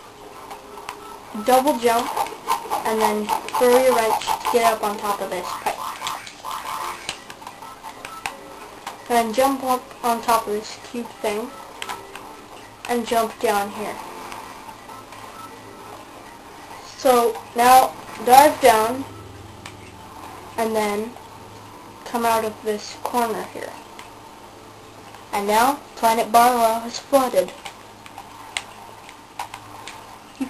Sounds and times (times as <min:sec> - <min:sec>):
Speech: 0:01.4 - 0:02.1, 0:02.8 - 0:05.7, 0:09.1 - 0:11.5, 0:12.9 - 0:14.0, 0:16.9 - 0:19.1, 0:25.3 - 0:27.6.